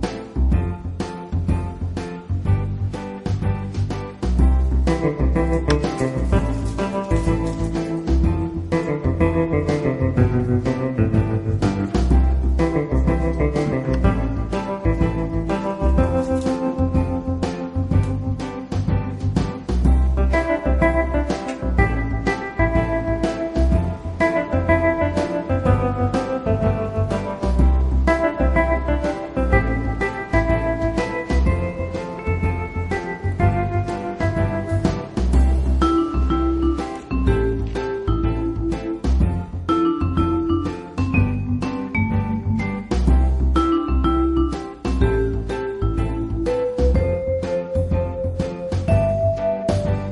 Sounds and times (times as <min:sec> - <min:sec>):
Music: 0:00.0 - 0:50.1.